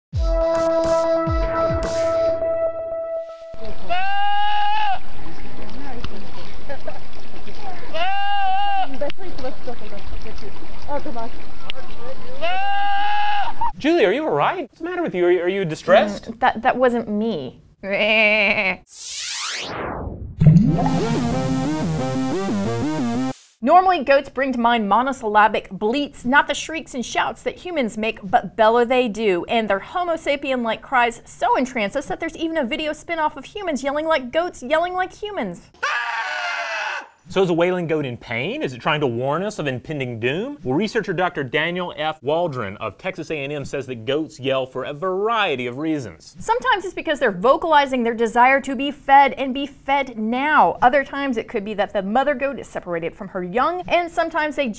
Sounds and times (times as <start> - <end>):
Goat: 3.6 - 5.0, 7.6 - 9.0, 12.4 - 13.6, 35.8 - 37.0.